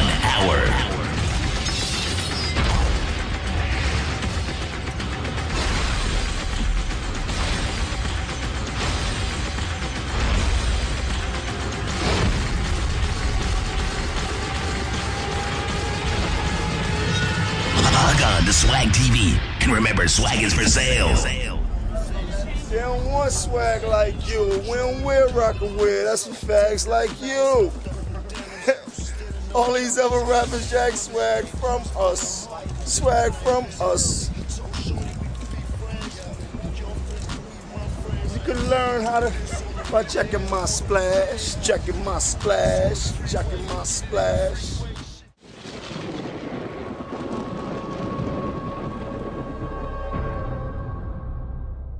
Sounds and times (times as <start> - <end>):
Speech: 0.0 - 1.1, 17.8 - 27.7, 29.5 - 35.1, 37.8 - 45.2
Music: 0.0 - 45.4, 48.1 - 51.9.